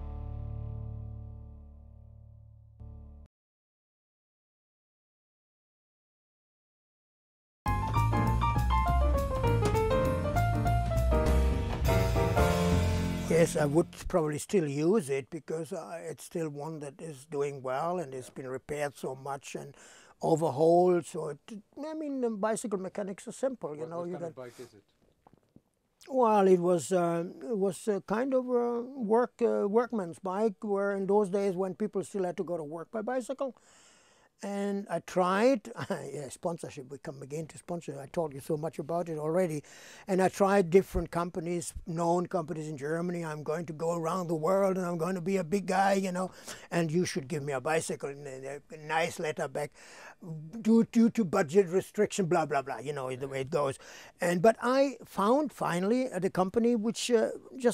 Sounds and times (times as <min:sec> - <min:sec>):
Speech: 0:13.3 - 0:24.8, 0:26.0 - 0:33.6, 0:34.4 - 0:57.7.